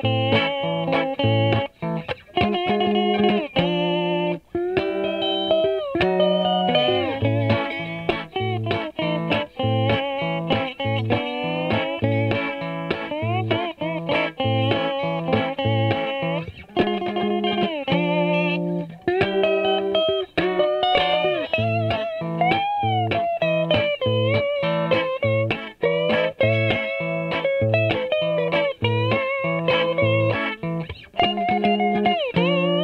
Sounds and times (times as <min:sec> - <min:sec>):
Effects unit: 0:00.0 - 0:32.8
Music: 0:00.0 - 0:32.8.